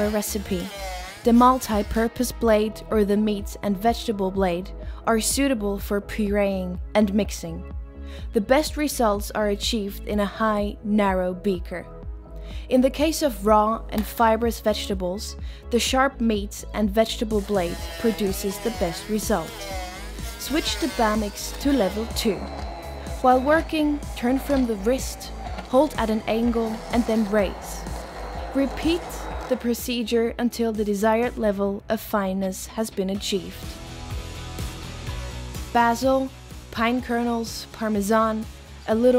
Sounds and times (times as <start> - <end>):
Speech: 0.0 - 7.6, 8.4 - 11.9, 12.7 - 19.7, 20.4 - 22.5, 23.2 - 27.8, 28.5 - 33.6, 35.8 - 39.1
Music: 0.0 - 39.1.